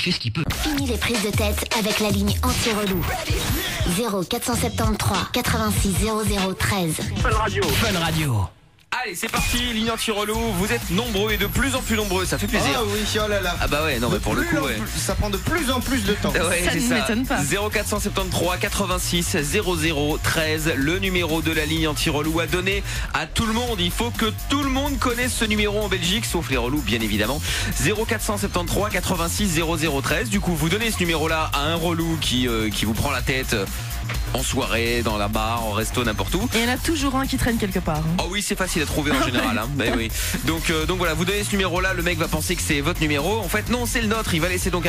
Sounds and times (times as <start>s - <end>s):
Speech: 0.0s - 33.7s, 34.3s - 44.8s
Music: 0.0s - 44.8s
Radio: 12.0s - 13.2s, 15.9s - 17.6s, 38.8s - 40.9s.